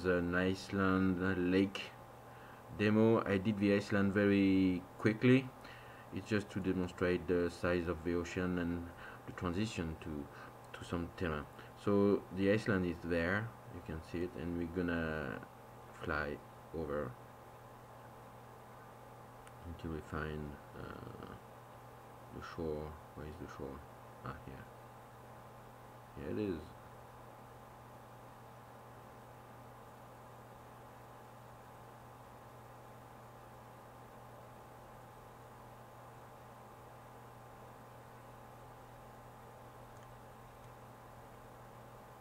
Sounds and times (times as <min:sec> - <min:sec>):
Speech: 0:00.0 - 0:02.0, 0:02.7 - 0:05.6, 0:06.2 - 0:17.2, 0:19.6 - 0:21.4, 0:22.3 - 0:24.7, 0:26.2 - 0:26.8.